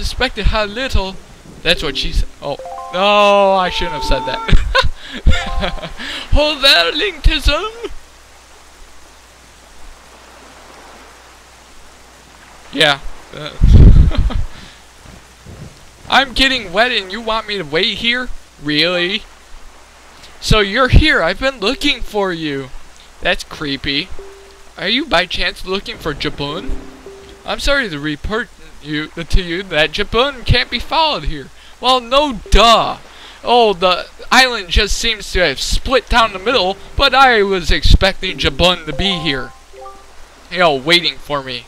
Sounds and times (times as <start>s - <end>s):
Speech: 0.0s - 4.6s, 6.3s - 8.0s, 12.8s - 13.8s, 16.1s - 19.3s, 20.3s - 24.2s, 24.8s - 26.8s, 27.4s - 39.6s, 40.5s - 41.6s
Wind noise (microphone): 13.6s - 16.2s.